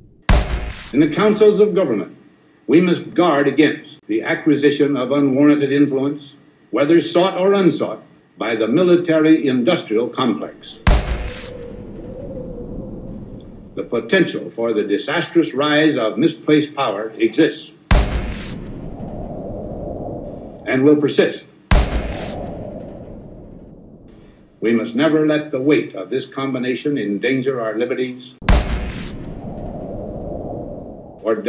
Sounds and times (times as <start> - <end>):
Speech: 1.0 - 10.8, 13.8 - 17.8, 20.7 - 21.6, 24.6 - 28.4, 31.2 - 31.4.